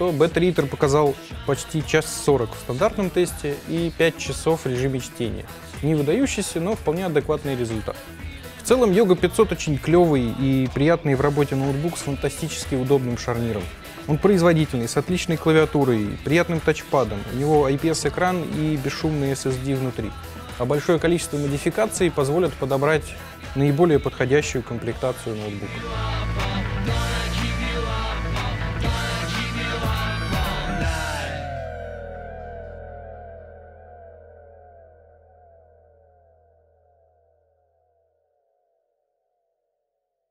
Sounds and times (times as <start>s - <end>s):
Music: 0.0s - 37.1s.